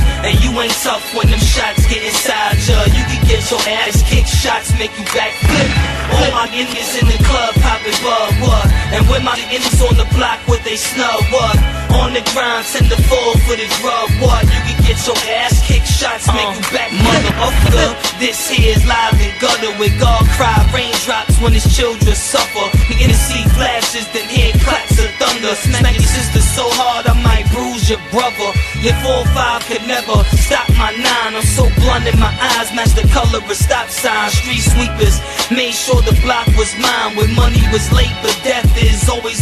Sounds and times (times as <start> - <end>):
Music: 0.0 - 39.4.